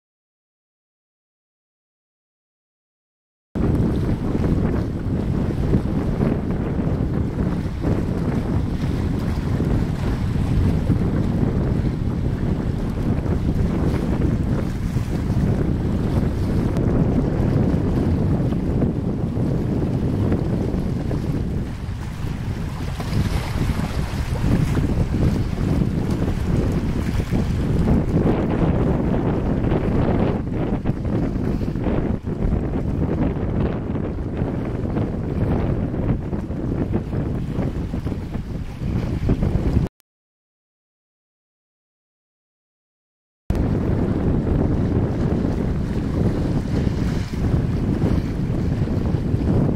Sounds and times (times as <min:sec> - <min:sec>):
Boat, Water vehicle: 0:03.6 - 0:39.9, 0:43.5 - 0:49.7.